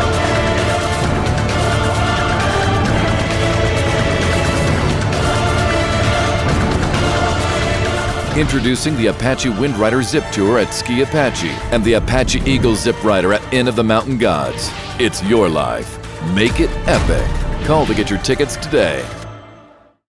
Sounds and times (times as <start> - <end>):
Music: 0.0 - 20.1
Speech: 8.4 - 19.2.